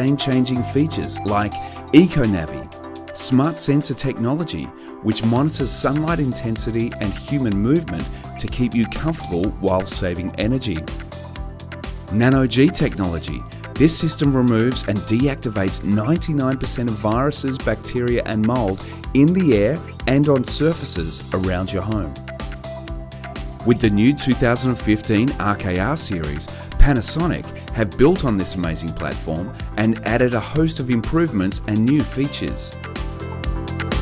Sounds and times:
Speech: 0.0s - 10.9s, 12.1s - 22.2s, 23.6s - 32.8s
Music: 0.0s - 34.0s.

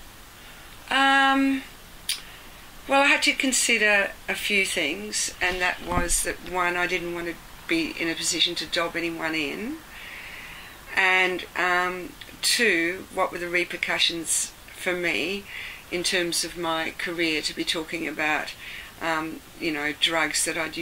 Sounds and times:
Speech: 0.9s - 1.7s, 2.9s - 9.8s, 11.0s - 20.8s.

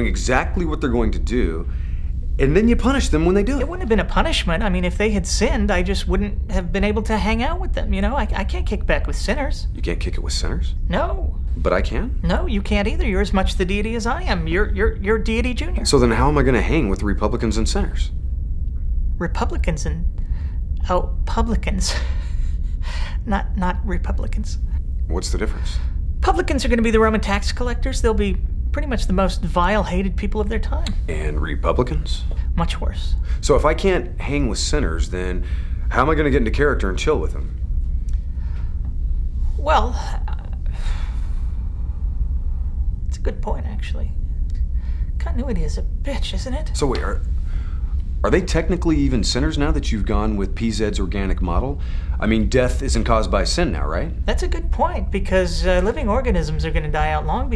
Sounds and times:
Inside, small room: 0.0s - 57.5s
Speech: 26.3s - 32.2s.

